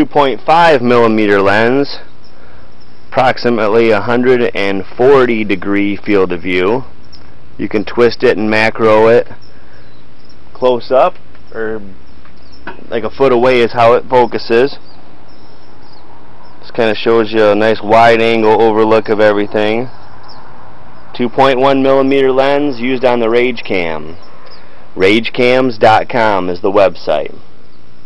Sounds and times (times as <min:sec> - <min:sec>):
Speech: 0:00.0 - 0:02.1, 0:03.2 - 0:06.9, 0:07.6 - 0:09.4, 0:10.6 - 0:12.0, 0:12.8 - 0:14.8, 0:16.6 - 0:19.9, 0:21.1 - 0:24.2, 0:25.0 - 0:27.4.